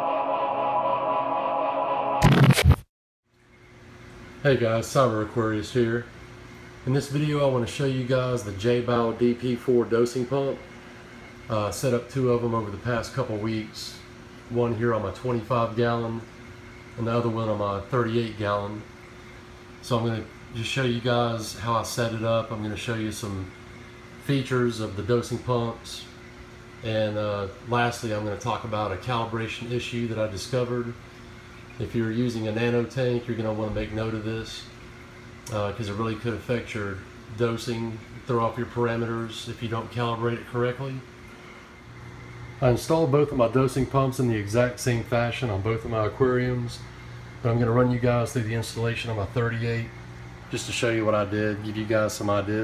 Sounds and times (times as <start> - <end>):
Speech: 4.4 - 6.1, 6.8 - 10.6, 11.5 - 16.3, 17.0 - 18.9, 19.8 - 23.5, 24.2 - 26.2, 26.8 - 31.0, 31.8 - 34.8, 35.5 - 41.1, 42.6 - 52.6.